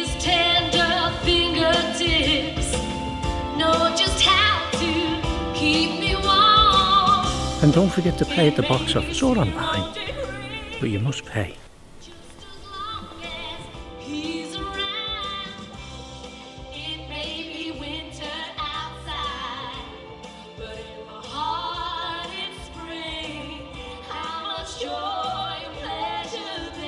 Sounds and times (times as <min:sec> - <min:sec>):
Music: 0:00.0 - 0:26.8.